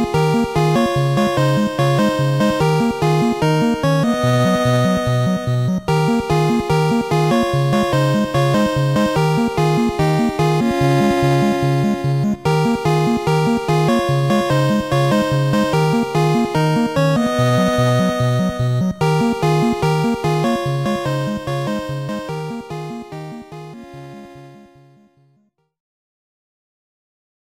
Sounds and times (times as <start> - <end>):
Music: 0.0 - 25.8.